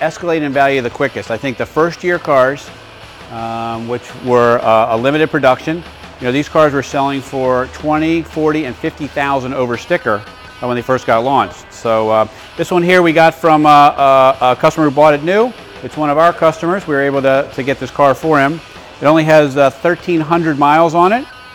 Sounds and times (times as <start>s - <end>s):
Speech: 0.0s - 2.7s, 3.3s - 21.3s
Music: 0.0s - 21.5s.